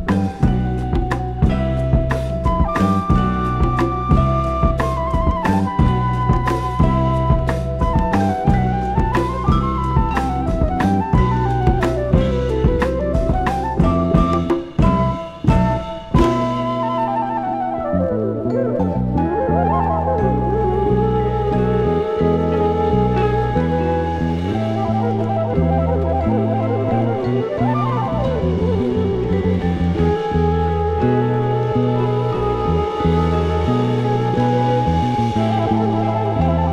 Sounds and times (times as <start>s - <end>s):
Jazz: 0.0s - 36.7s.